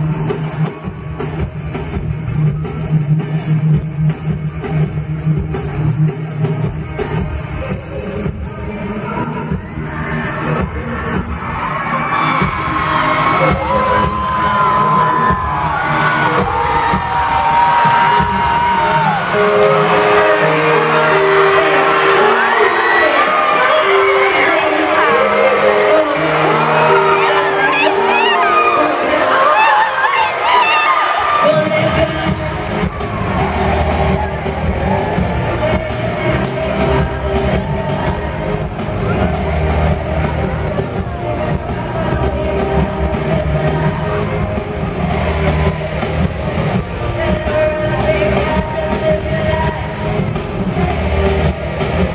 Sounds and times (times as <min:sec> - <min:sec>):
Inside, public space: 0:00.0 - 0:52.1
Music: 0:00.0 - 0:52.1
Singing: 0:06.7 - 0:52.1.